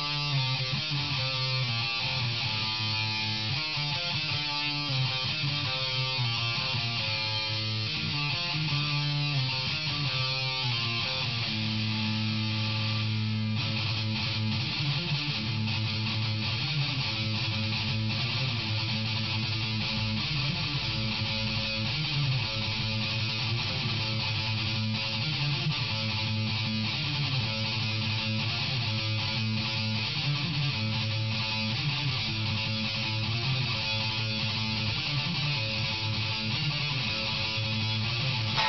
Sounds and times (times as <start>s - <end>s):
Electric guitar: 0.0s - 38.6s.